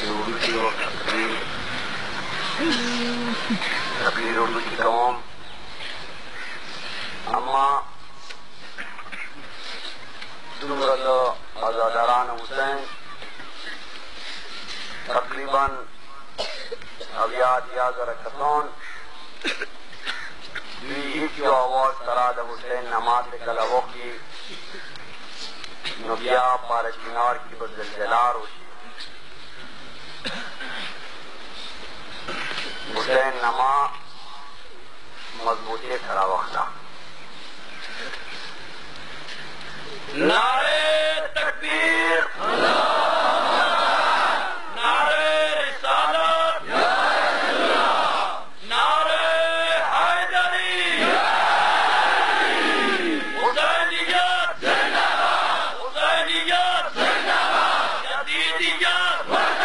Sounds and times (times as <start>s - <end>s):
Male speech, man speaking: 0.0s - 1.5s, 4.0s - 5.2s, 7.3s - 7.9s, 10.6s - 13.0s, 15.1s - 15.9s, 17.1s - 18.8s, 20.8s - 24.2s, 25.9s - 28.7s, 32.9s - 34.0s, 35.4s - 36.8s, 40.1s - 42.4s, 48.7s - 51.0s, 53.4s - 54.6s, 58.1s - 59.3s.